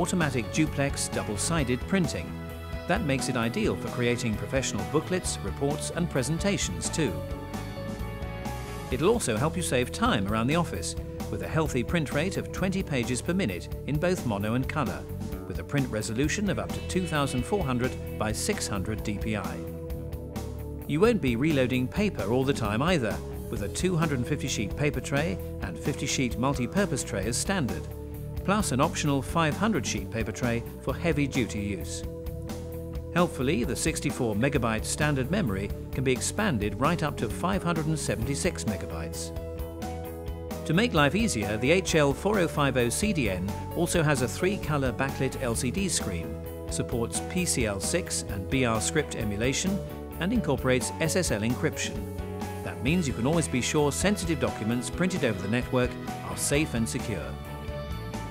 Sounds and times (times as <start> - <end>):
Speech: 0.0 - 2.3, 2.9 - 7.2, 8.9 - 19.7, 20.9 - 32.1, 33.1 - 39.3, 40.6 - 52.0, 52.6 - 57.4
Music: 0.0 - 58.3.